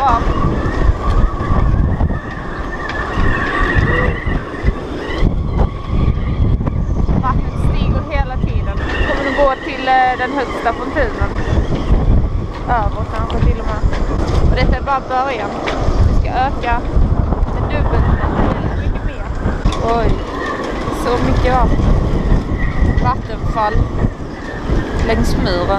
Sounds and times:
Speech: 0.0 - 0.3, 7.2 - 11.4, 12.7 - 13.8, 14.5 - 16.8, 17.6 - 20.2, 20.9 - 21.7, 23.0 - 23.9, 25.0 - 25.7.

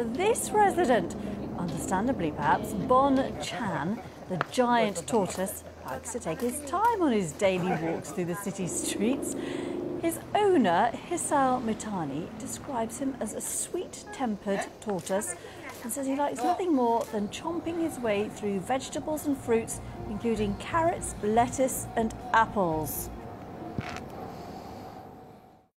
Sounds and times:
Speech: 0.0 - 9.4, 10.0 - 23.1.

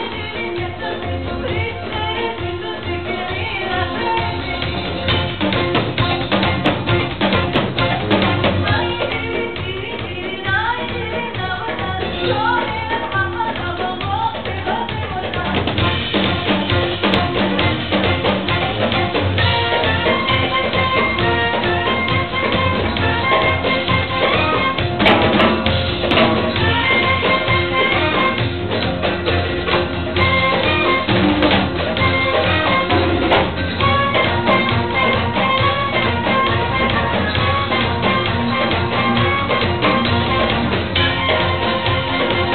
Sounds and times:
Percussion: 0.0 - 42.5.

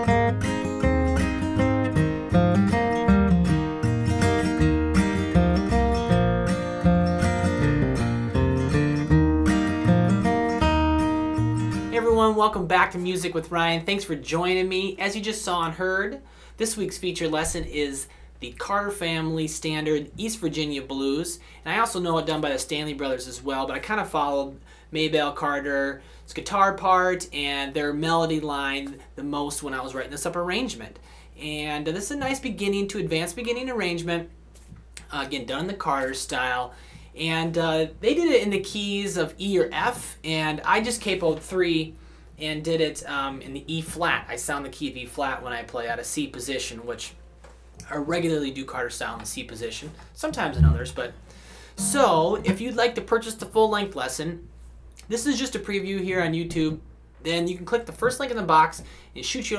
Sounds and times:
Speech: 11.9 - 34.3, 35.0 - 47.2, 47.8 - 51.2, 51.8 - 59.5.

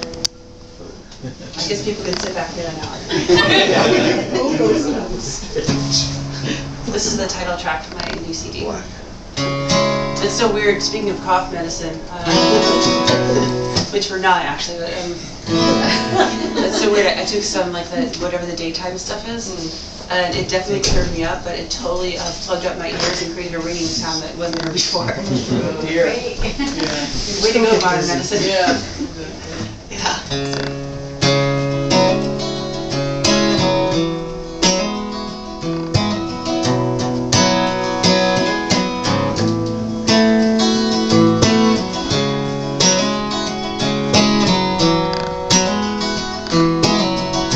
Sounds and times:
Music: 0.0 - 0.9, 5.7 - 6.9, 9.4 - 13.9, 15.5 - 17.5, 30.3 - 47.5
Speech: 16.8 - 30.3.

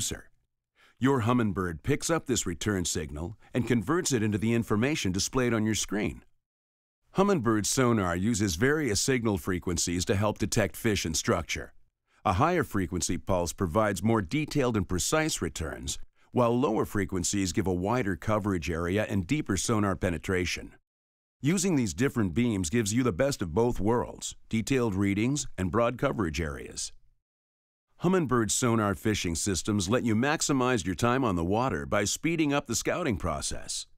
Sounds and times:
Speech: 0.0 - 0.4, 1.0 - 6.3, 7.1 - 20.8, 21.4 - 27.0, 28.0 - 33.9.

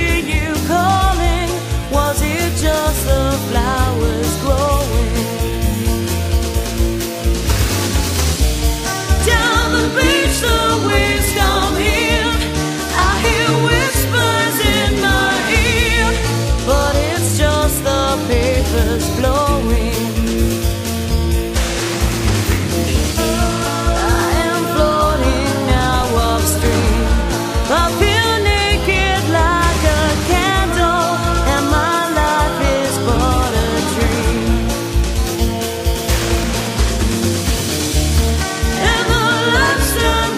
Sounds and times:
Music: 0.0 - 40.3.

